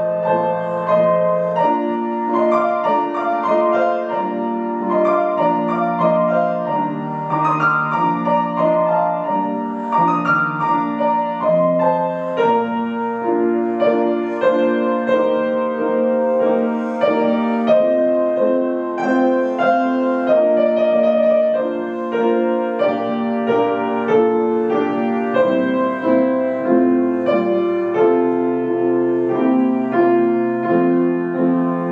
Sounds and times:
Music: 0:00.0 - 0:31.9.

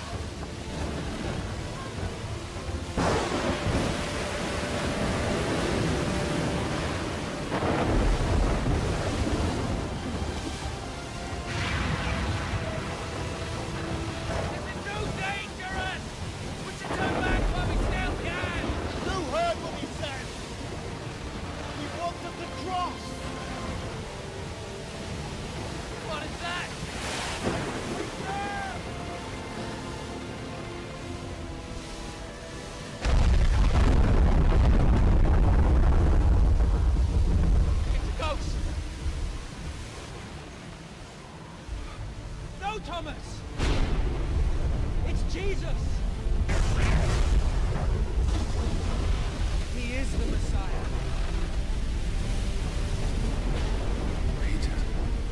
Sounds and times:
Music: 0:00.0 - 0:55.3
Outside, rural or natural: 0:00.0 - 0:55.3.

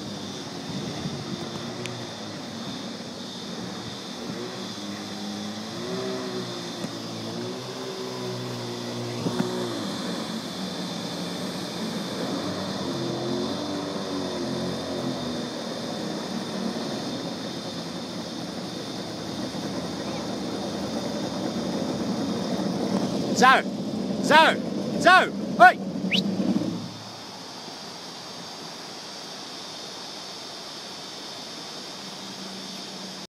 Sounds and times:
Sailboat, sailing ship: 0:00.0 - 0:33.3
Speech: 0:23.4 - 0:25.8.

